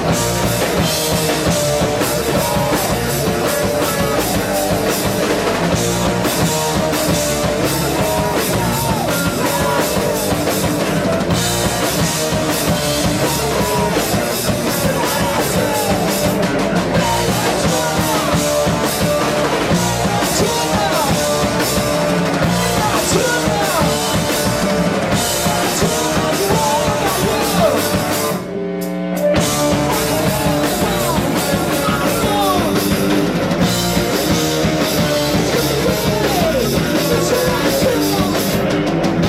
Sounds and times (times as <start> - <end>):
Rock and roll: 0.0 - 39.2.